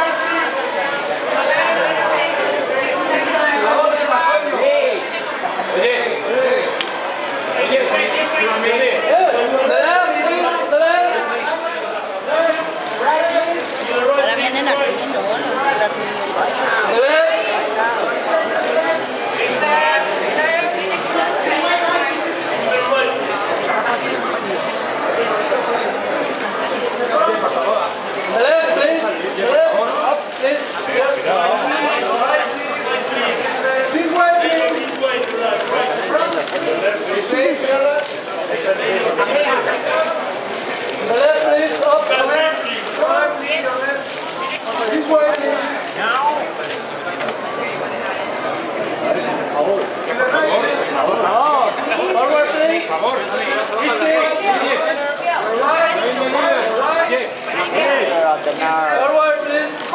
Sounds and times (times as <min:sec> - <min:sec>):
Speech: 0:00.0 - 0:59.9.